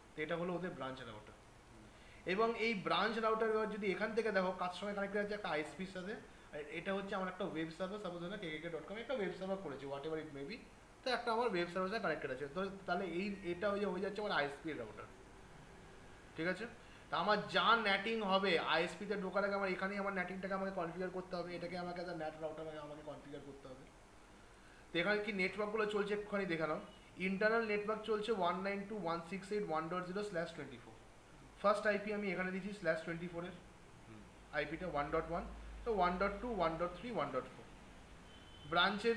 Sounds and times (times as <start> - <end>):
Speech: 0.2 - 1.4, 2.3 - 15.1, 16.4 - 23.9, 25.0 - 31.0, 31.6 - 37.7, 38.7 - 39.1.